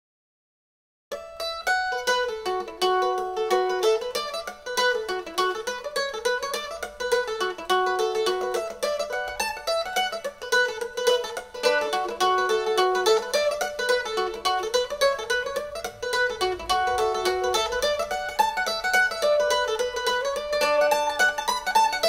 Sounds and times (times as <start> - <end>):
Mandolin: 1.1 - 22.0.